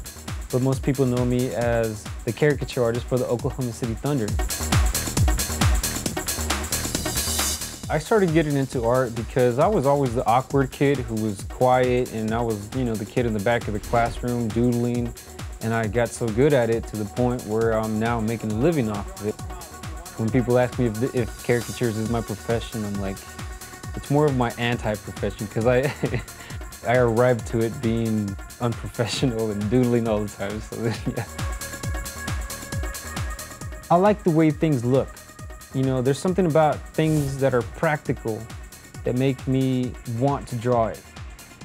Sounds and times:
Music: 0:00.0 - 0:41.6
Speech: 0:00.5 - 0:04.4, 0:07.9 - 0:23.2, 0:24.0 - 0:26.2, 0:26.8 - 0:31.3, 0:33.9 - 0:41.0.

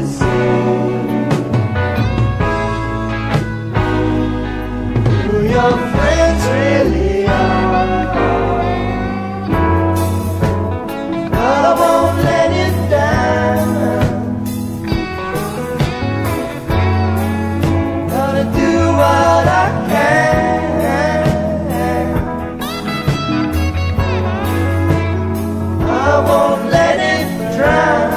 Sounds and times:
Music: 0:00.0 - 0:28.1.

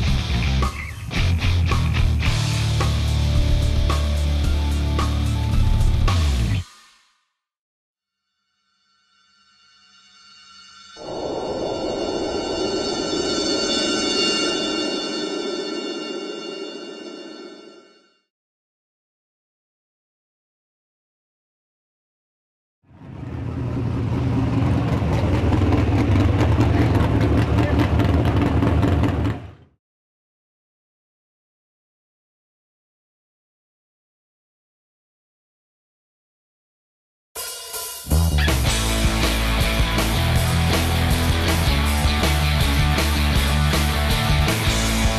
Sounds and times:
Vehicle: 0:22.9 - 0:29.7
Speech: 0:26.6 - 0:28.0.

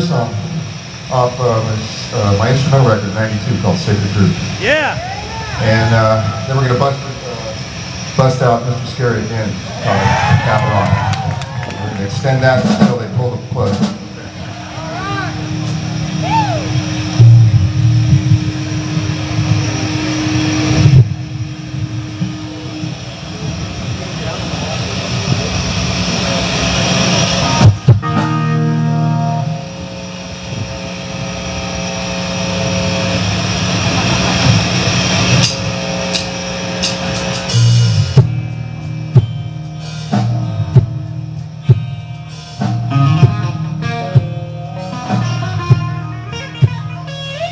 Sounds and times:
Bass guitar: 0:00.0 - 0:47.5
Speech: 0:01.1 - 0:05.0, 0:11.8 - 0:14.0.

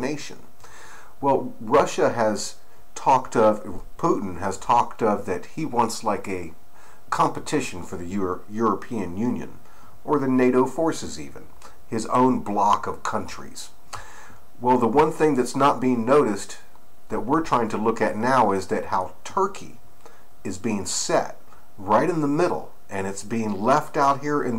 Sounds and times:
Speech: 0:00.0 - 0:00.5, 0:01.2 - 0:13.8, 0:14.6 - 0:19.8, 0:20.4 - 0:24.5.

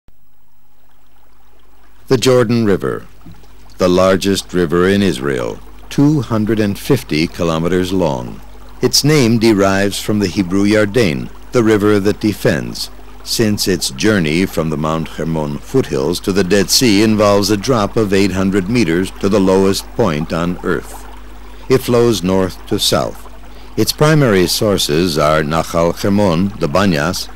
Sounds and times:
Speech: 0:02.1 - 0:03.1, 0:03.8 - 0:21.0, 0:21.7 - 0:23.2, 0:23.8 - 0:27.3.

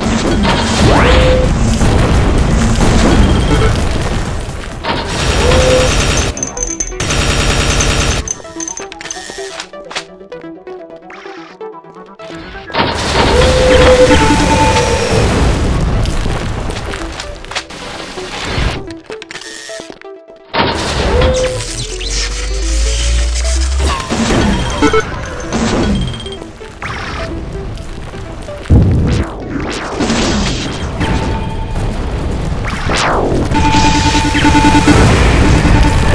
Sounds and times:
Music: 0:00.0 - 0:36.1.

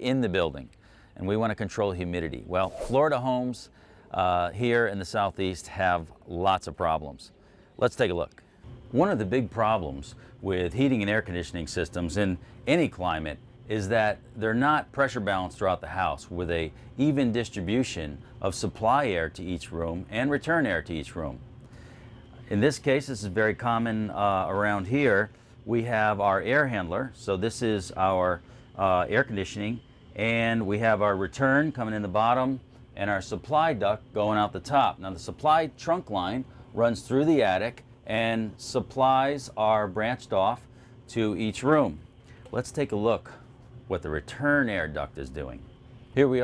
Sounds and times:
Speech: 0:00.0 - 0:21.4, 0:22.4 - 0:46.4.

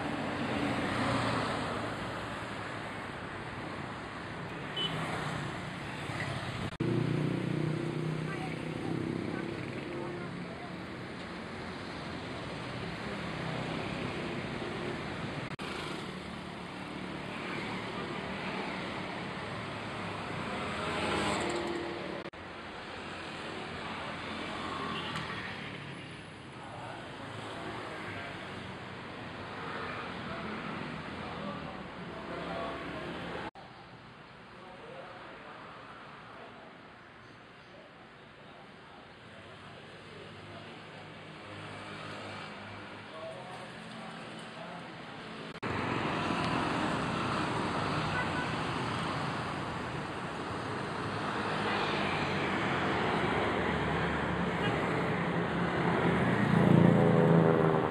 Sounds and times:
Vehicle: 0:00.0 - 0:57.9
Speech: 0:08.2 - 0:11.1, 0:26.5 - 0:28.7, 0:29.8 - 0:33.8, 0:34.4 - 0:41.8, 0:42.6 - 0:45.5.

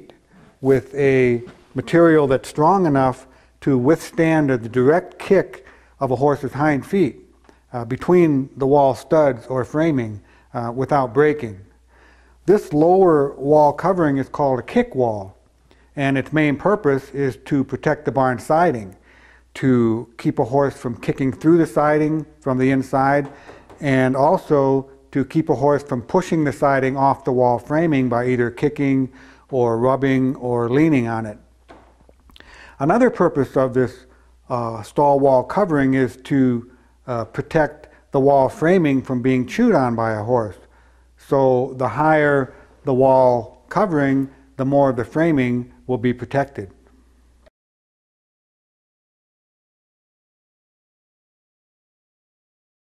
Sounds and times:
Speech: 0:00.0 - 0:11.7, 0:12.5 - 0:15.4, 0:16.0 - 0:31.5, 0:32.8 - 0:46.8.

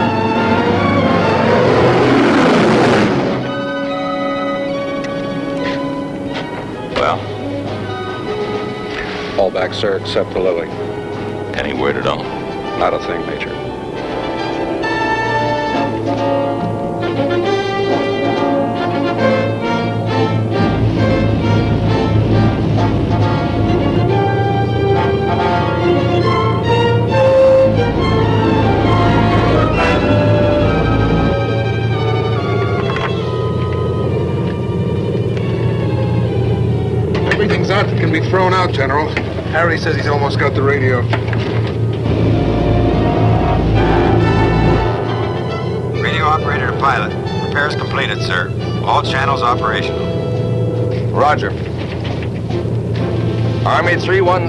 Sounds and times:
Music: 0:00.0 - 0:54.4.

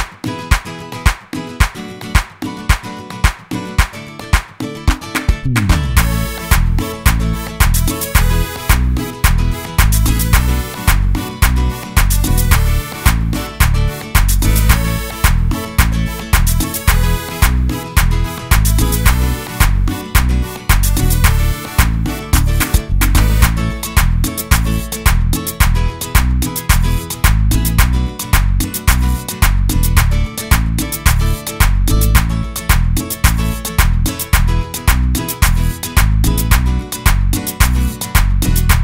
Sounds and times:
Guitar: 0:00.0 - 0:38.8.

